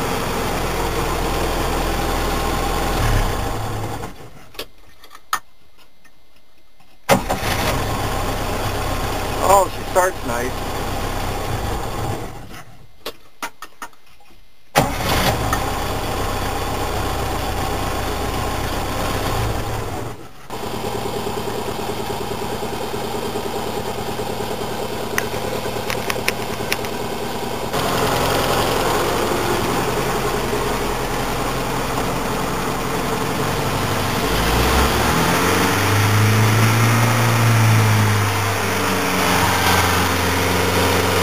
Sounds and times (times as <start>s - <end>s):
Engine: 0.0s - 4.7s, 7.1s - 12.9s, 14.8s - 41.2s
Vehicle: 0.0s - 5.2s, 7.1s - 12.9s, 14.8s - 41.2s.